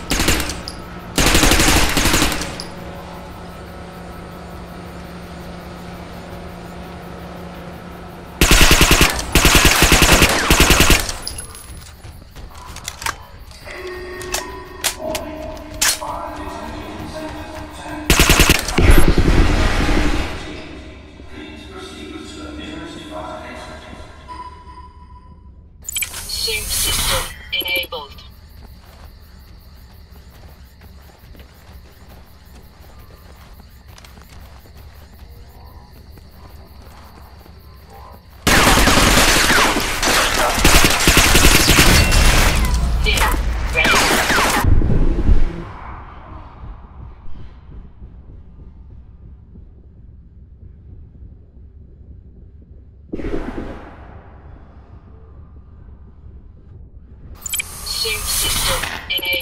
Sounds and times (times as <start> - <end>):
Fusillade: 0.0 - 2.8, 8.4 - 11.5, 18.1 - 20.5, 38.5 - 44.7.